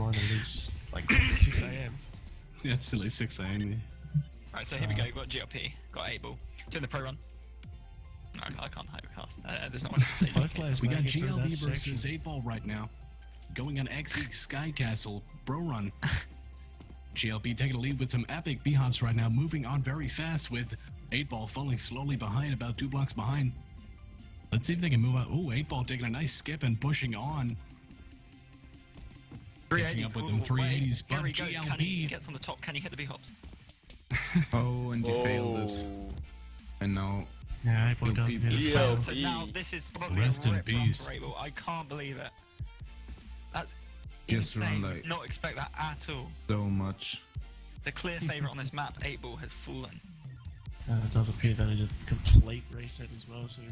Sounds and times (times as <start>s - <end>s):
Speech: 0.0s - 2.0s, 4.5s - 7.2s, 8.4s - 12.9s, 13.5s - 16.0s, 17.2s - 23.6s, 24.5s - 27.6s, 29.7s - 33.3s, 34.6s - 36.2s, 36.8s - 42.3s, 43.6s - 47.2s, 47.8s - 50.0s, 50.9s - 53.7s.